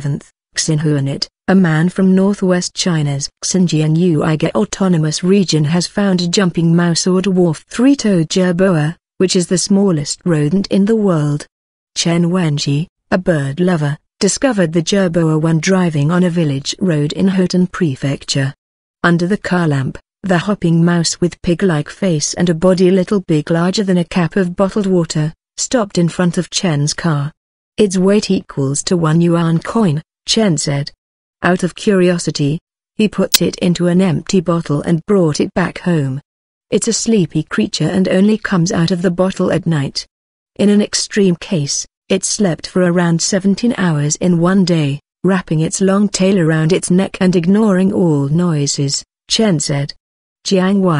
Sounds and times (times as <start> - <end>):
Speech: 0.0 - 50.9.